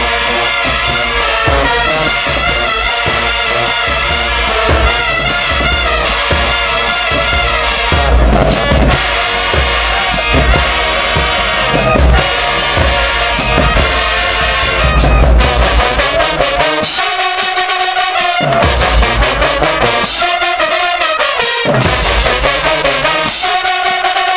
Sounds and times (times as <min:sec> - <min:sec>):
Music: 0:00.0 - 0:24.3.